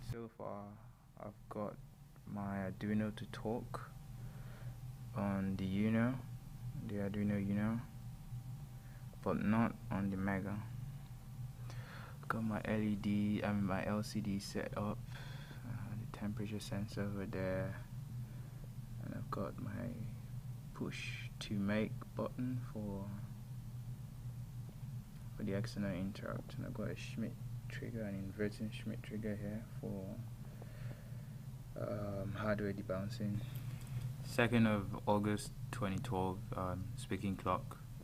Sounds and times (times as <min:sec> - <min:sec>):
Speech: 0:00.0 - 0:03.9, 0:05.2 - 0:07.9, 0:09.2 - 0:10.8, 0:12.3 - 0:15.0, 0:15.6 - 0:17.9, 0:19.0 - 0:20.2, 0:20.8 - 0:23.3, 0:25.4 - 0:30.2, 0:31.8 - 0:33.5, 0:34.2 - 0:37.9.